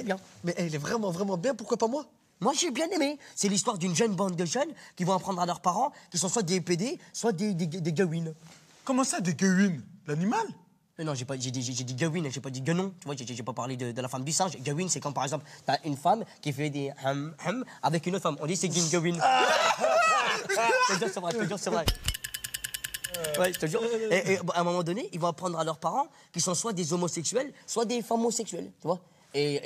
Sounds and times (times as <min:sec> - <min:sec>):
Speech: 0:00.0 - 0:19.3, 0:20.6 - 0:21.9, 0:23.2 - 0:29.6.